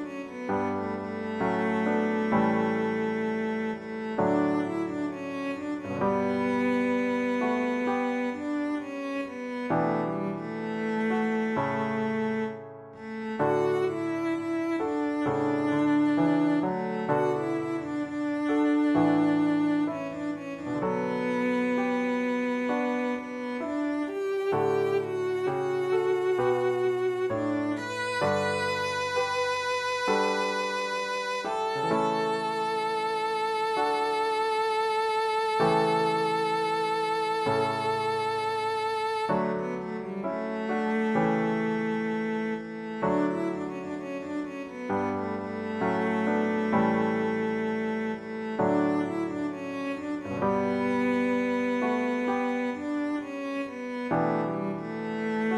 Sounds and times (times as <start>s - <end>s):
Cello: 0.0s - 55.5s.